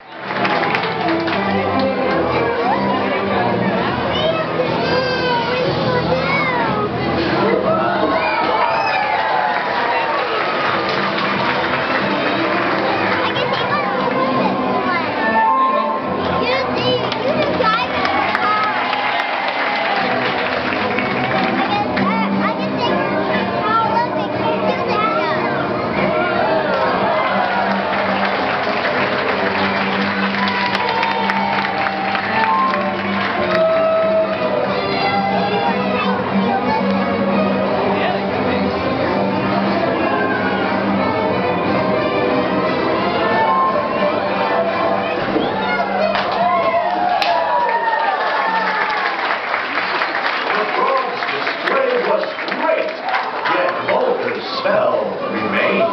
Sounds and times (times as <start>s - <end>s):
Music: 0.0s - 55.9s.